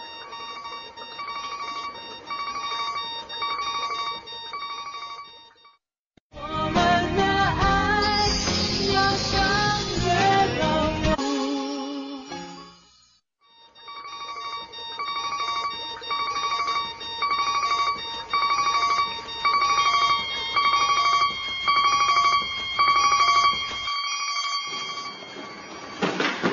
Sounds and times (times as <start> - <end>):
Alarm clock: 0.0 - 5.8, 13.4 - 26.5.